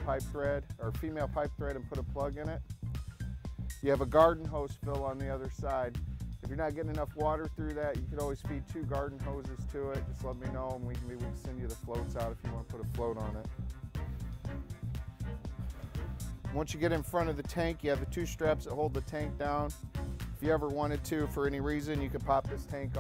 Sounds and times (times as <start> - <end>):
Speech: 0.0 - 2.6, 3.8 - 13.5, 16.6 - 19.8, 20.4 - 23.0
Music: 0.0 - 23.0.